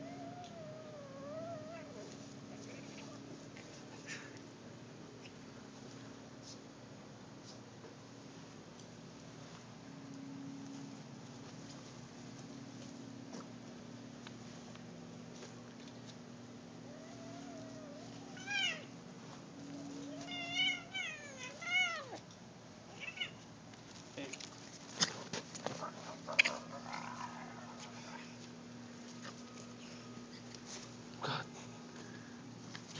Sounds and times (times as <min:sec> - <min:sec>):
Caterwaul: 0:00.0 - 0:02.1, 0:16.9 - 0:18.9, 0:19.8 - 0:22.2
Meow: 0:00.0 - 0:02.1, 0:16.9 - 0:18.9, 0:19.8 - 0:22.2, 0:22.9 - 0:23.4.